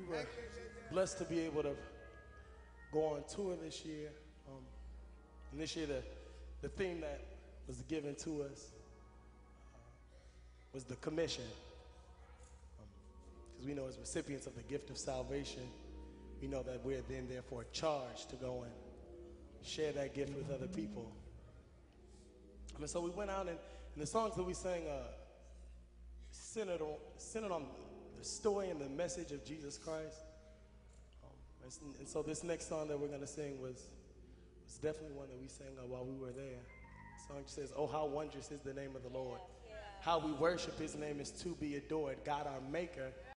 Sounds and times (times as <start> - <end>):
Speech: 0.0 - 2.1, 2.9 - 4.8, 5.4 - 8.7, 9.6 - 15.8, 16.4 - 18.8, 19.6 - 21.3, 22.7 - 25.4, 26.3 - 30.3, 31.2 - 34.0, 34.7 - 43.3.